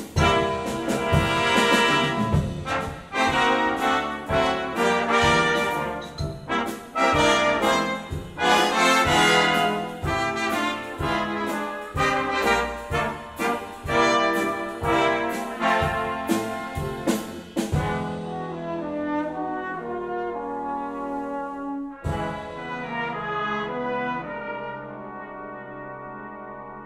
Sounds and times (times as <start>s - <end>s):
French horn: 0.0s - 26.8s.